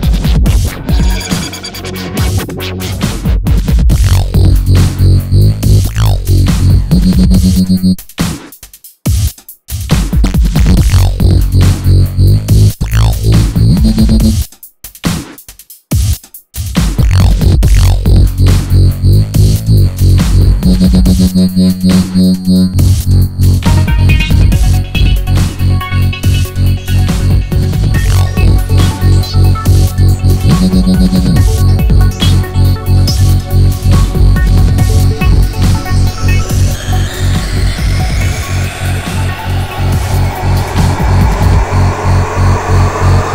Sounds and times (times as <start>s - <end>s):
Synthesizer: 0.0s - 8.0s, 10.6s - 14.4s, 17.1s - 43.3s
Dubstep: 0.0s - 8.4s, 9.8s - 14.5s, 16.8s - 43.3s
Trance music: 0.1s - 3.2s, 3.9s - 8.0s, 10.6s - 14.4s, 17.0s - 43.3s.